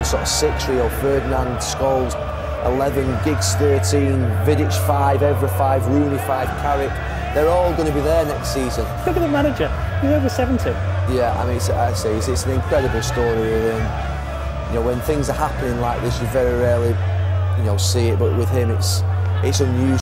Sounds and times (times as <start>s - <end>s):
Speech: 0.0s - 14.0s, 14.7s - 17.0s, 17.6s - 20.0s
Music: 0.0s - 20.0s.